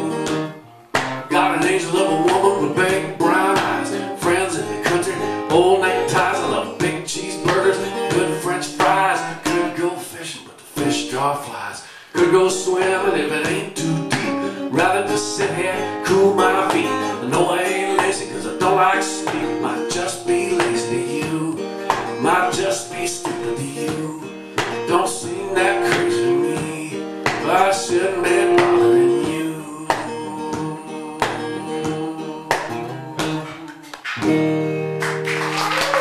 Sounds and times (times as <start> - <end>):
Music: 0.0 - 36.0
Singing: 1.3 - 11.2, 12.2 - 34.1.